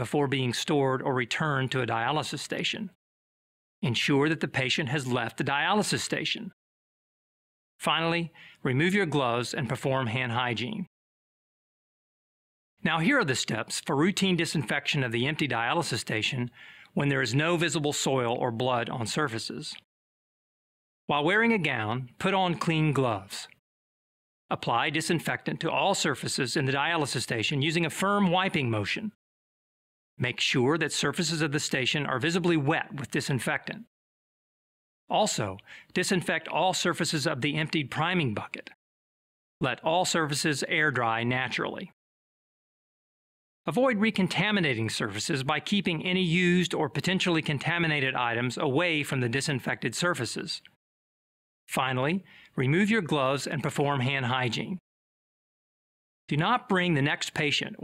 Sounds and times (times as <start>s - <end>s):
Speech: 0.0s - 3.0s, 3.8s - 6.6s, 7.8s - 10.9s, 12.8s - 19.9s, 21.1s - 23.6s, 24.5s - 29.2s, 30.2s - 33.9s, 35.1s - 38.8s, 39.6s - 42.0s, 43.7s - 50.8s, 51.7s - 54.8s, 56.3s - 57.8s.